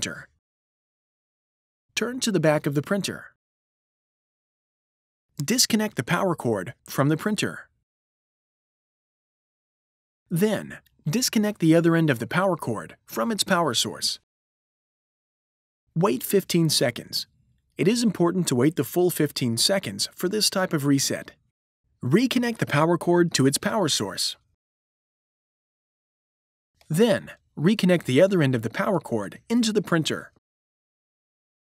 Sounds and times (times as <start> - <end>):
Speech: 0.0 - 0.4, 2.0 - 3.4, 5.4 - 7.7, 10.3 - 14.3, 16.0 - 21.4, 22.0 - 24.5, 26.8 - 30.4.